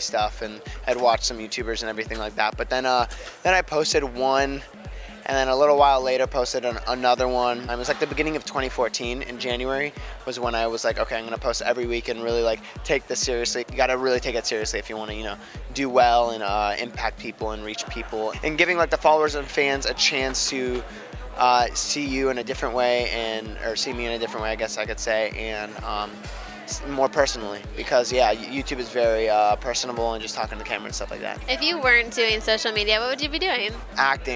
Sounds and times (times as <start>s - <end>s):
Music: 0.0s - 34.3s.